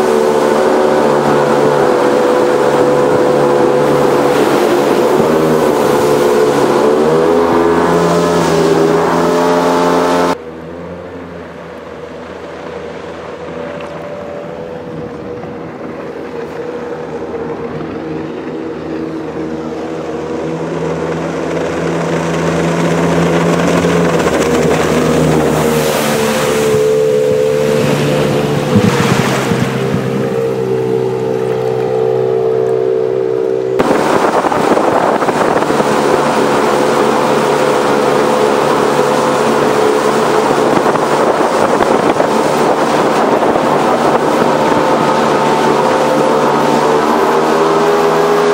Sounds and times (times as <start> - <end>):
Motorboat, speedboat: 0.0 - 48.5.